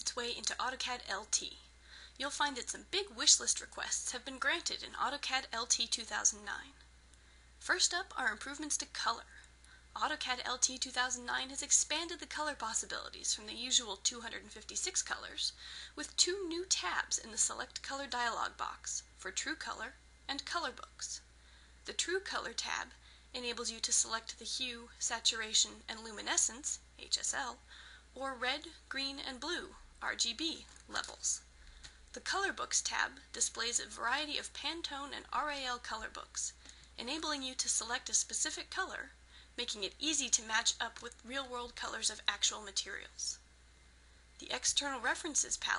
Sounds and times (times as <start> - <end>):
Speech: 0.0 - 6.8, 7.6 - 21.3, 21.9 - 27.6, 28.2 - 31.5, 32.2 - 43.4, 44.4 - 45.7.